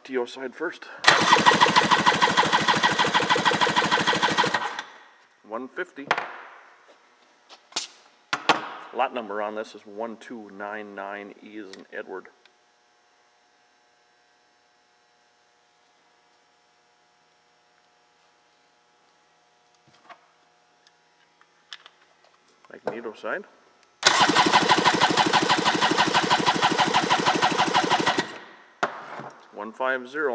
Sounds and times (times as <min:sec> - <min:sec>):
Speech: 0:00.0 - 0:01.0, 0:05.4 - 0:06.1, 0:09.0 - 0:12.4, 0:22.7 - 0:23.5, 0:29.5 - 0:30.3.